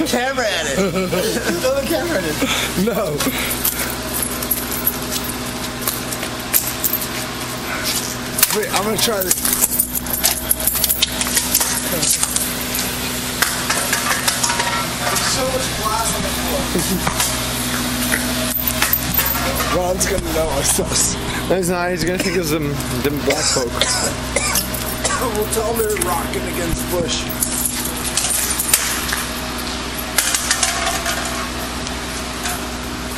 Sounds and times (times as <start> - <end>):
Speech: 0.0 - 3.3, 8.5 - 9.4, 15.0 - 17.0, 19.4 - 24.2, 25.1 - 27.3.